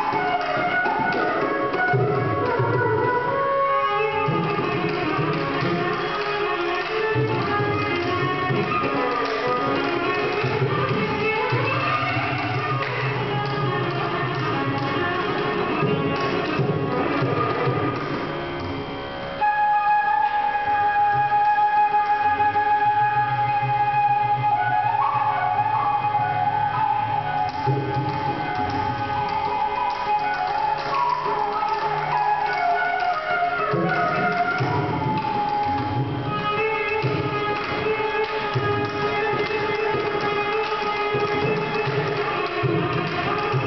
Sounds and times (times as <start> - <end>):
Flute: 0.0 - 43.6
Independent music: 0.0 - 43.6.